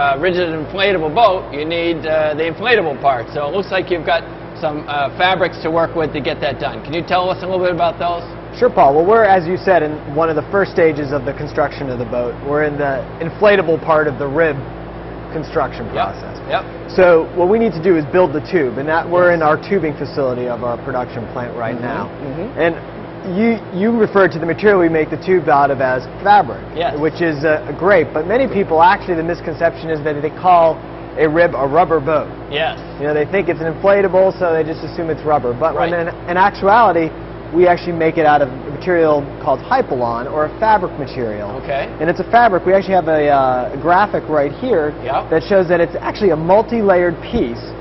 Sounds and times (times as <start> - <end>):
Speech: 0.0 - 14.7, 15.3 - 47.7.